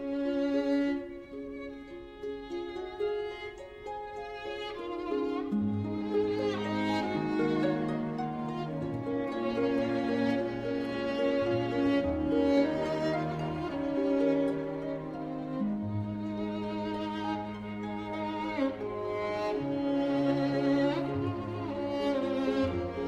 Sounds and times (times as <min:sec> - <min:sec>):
Music: 0:00.0 - 0:23.0.